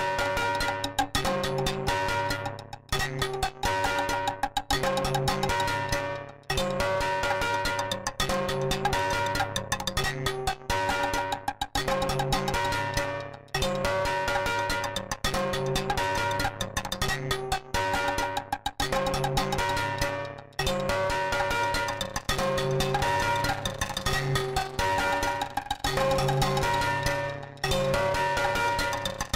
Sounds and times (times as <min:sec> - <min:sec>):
Glockenspiel: 0:00.0 - 0:29.3
Marimba, xylophone: 0:00.0 - 0:29.3.